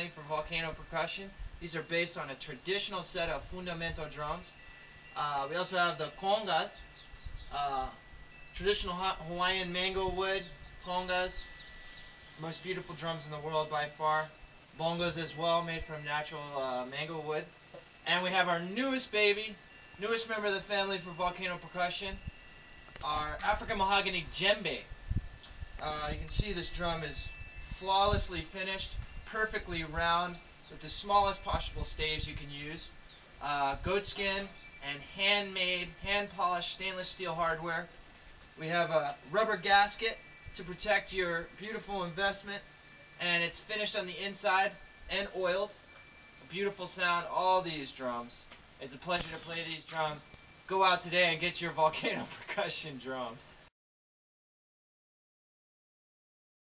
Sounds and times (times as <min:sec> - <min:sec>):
Speech: 0:00.0 - 0:04.6, 0:05.2 - 0:06.8, 0:07.5 - 0:08.0, 0:08.6 - 0:11.5, 0:12.4 - 0:17.5, 0:18.1 - 0:22.2, 0:23.0 - 0:24.9, 0:25.8 - 0:37.9, 0:38.6 - 0:42.6, 0:43.2 - 0:45.8, 0:46.4 - 0:53.4.